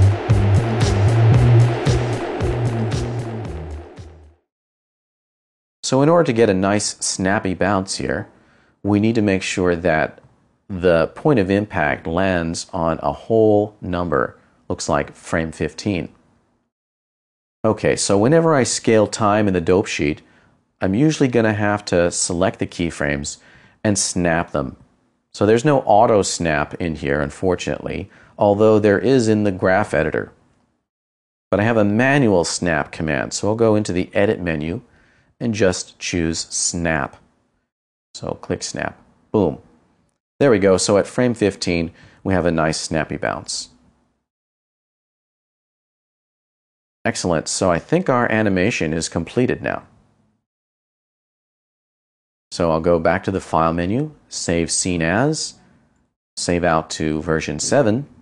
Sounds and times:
Speech: 5.8 - 8.3, 8.9 - 16.2, 17.7 - 24.8, 25.4 - 30.4, 31.6 - 37.2, 38.2 - 39.7, 40.4 - 43.8, 47.1 - 49.9, 52.5 - 55.6, 56.4 - 58.2.

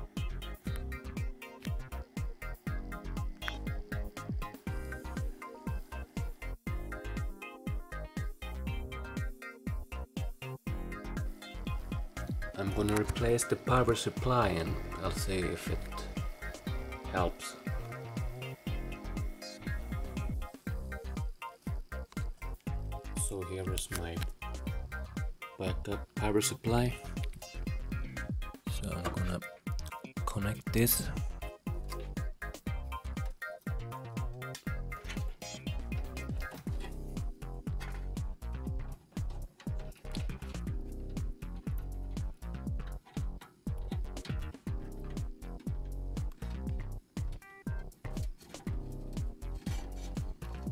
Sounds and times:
Music: 0.0 - 50.7.

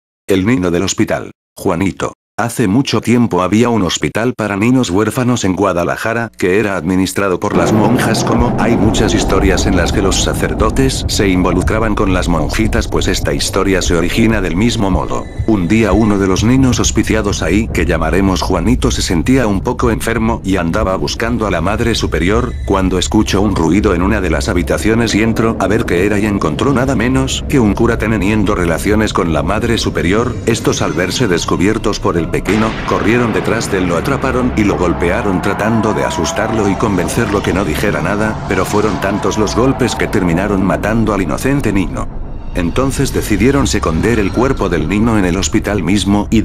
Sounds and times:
Speech synthesizer: 0.3 - 46.4.

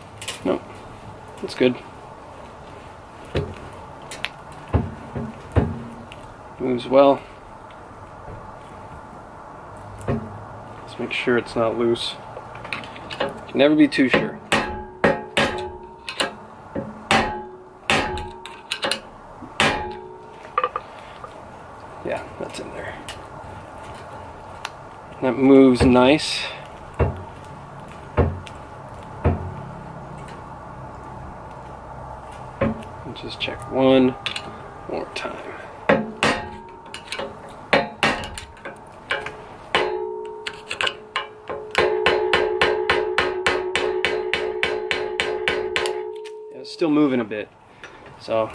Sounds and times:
Speech: 0.4 - 0.7, 1.4 - 1.8, 6.6 - 7.3, 10.9 - 12.2, 13.5 - 14.4, 22.0 - 23.1, 25.2 - 26.6, 33.0 - 34.2, 34.9 - 35.6, 46.6 - 47.5, 48.2 - 48.5.

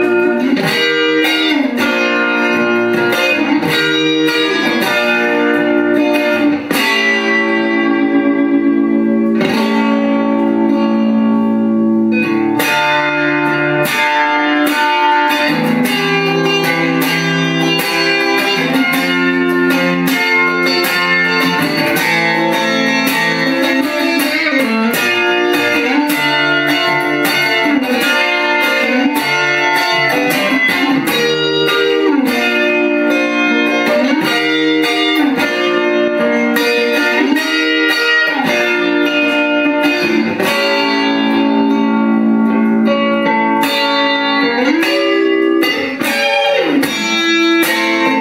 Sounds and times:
Electric guitar: 0.0 - 48.2.

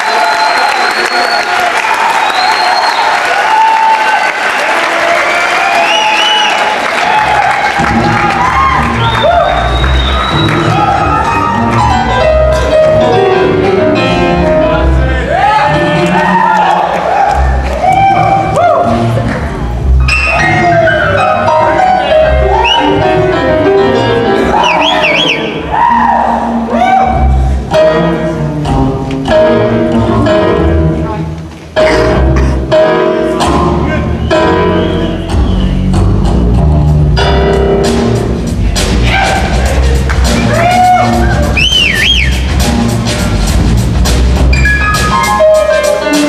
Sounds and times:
Music: 5.8 - 46.2.

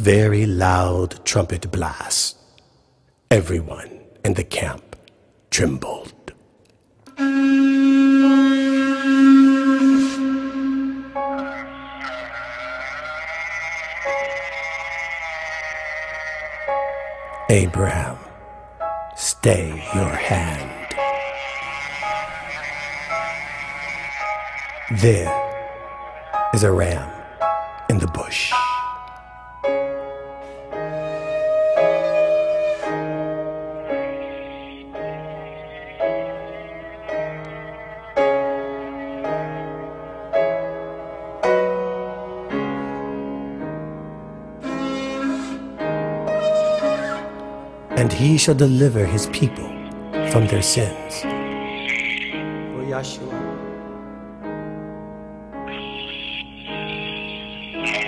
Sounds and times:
Speech: 0.0 - 2.4, 3.3 - 6.4, 17.5 - 18.3, 19.2 - 21.0, 24.9 - 25.4, 26.6 - 27.2, 27.9 - 28.6, 48.0 - 51.3, 52.7 - 53.6
Music: 0.0 - 58.0.

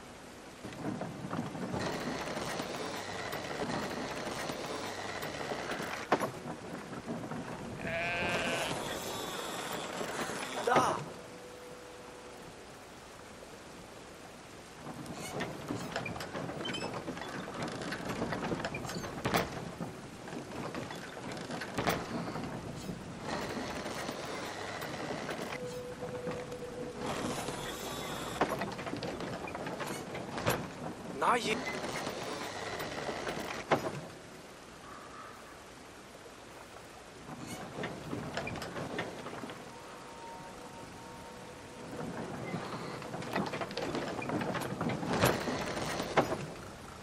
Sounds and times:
Sheep: 7.8 - 9.6
Speech: 10.6 - 11.1, 31.2 - 31.6.

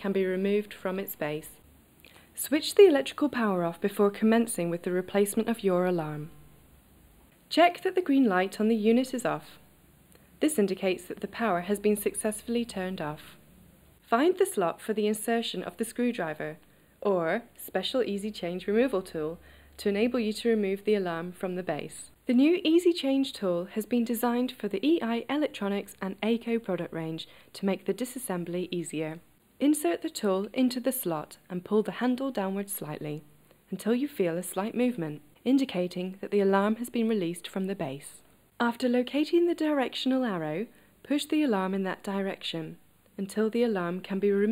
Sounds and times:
Speech: 0.0 - 1.6, 2.4 - 6.3, 7.5 - 9.6, 10.4 - 13.4, 14.1 - 44.5.

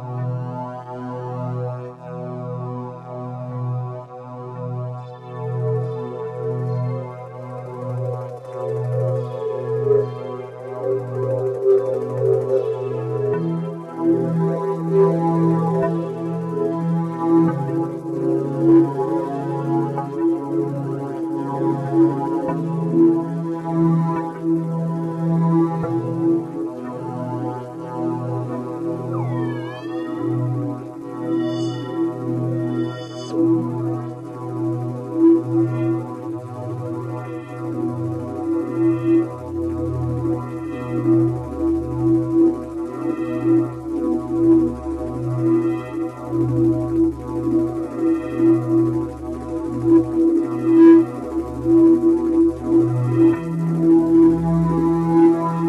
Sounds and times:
Music: 0.0 - 55.6.

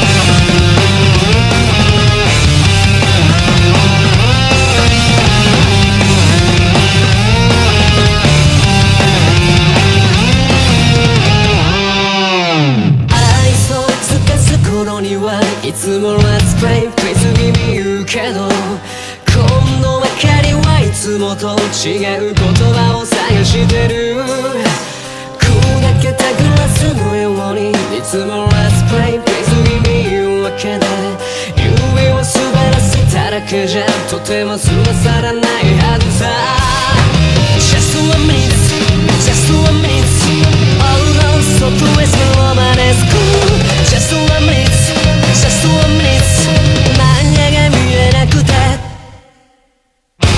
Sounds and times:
Music: 0.0 - 50.3.

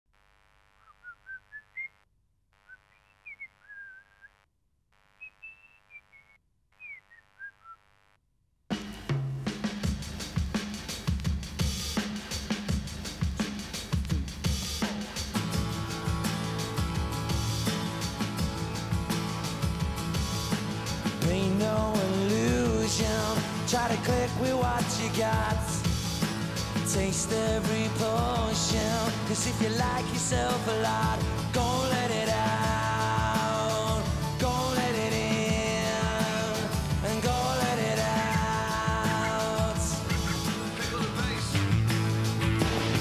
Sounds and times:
Outside, rural or natural: 0.7 - 7.9
Music: 8.7 - 43.0.

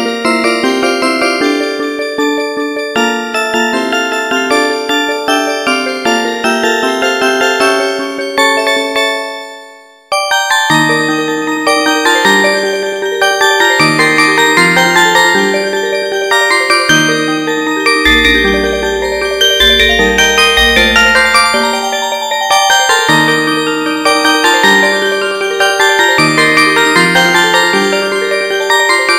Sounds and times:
Glockenspiel: 0.0 - 29.1
Marimba, xylophone: 18.1 - 22.2.

